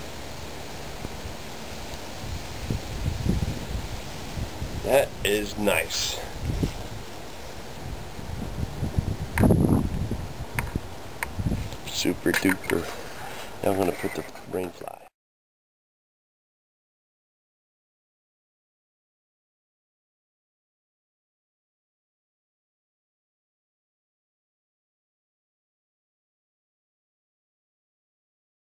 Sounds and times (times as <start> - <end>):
Outside, rural or natural: 0.0 - 15.2
Speech: 4.8 - 6.4, 11.8 - 13.0, 13.6 - 15.1.